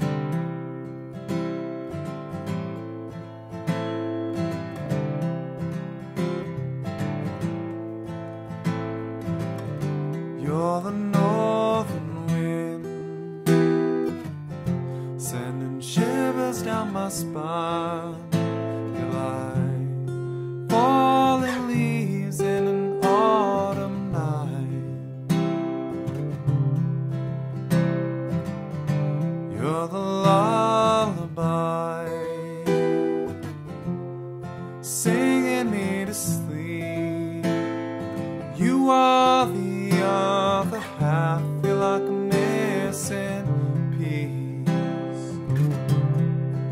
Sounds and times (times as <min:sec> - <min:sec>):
Music: 0:00.0 - 0:46.7.